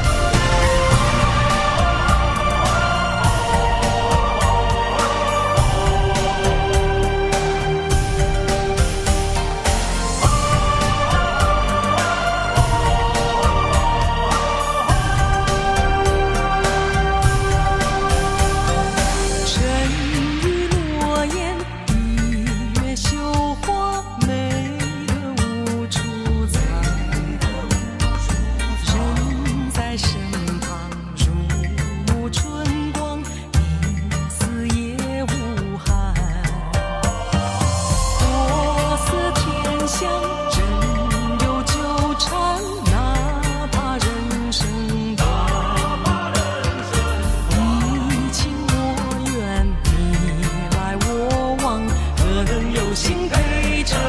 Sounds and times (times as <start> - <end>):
Music: 0.0 - 54.0.